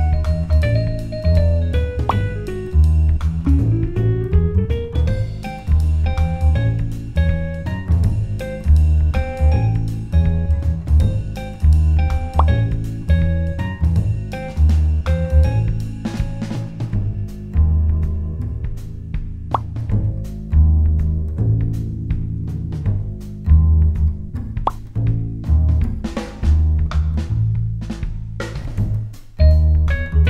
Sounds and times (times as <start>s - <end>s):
Jazz: 0.0s - 30.3s.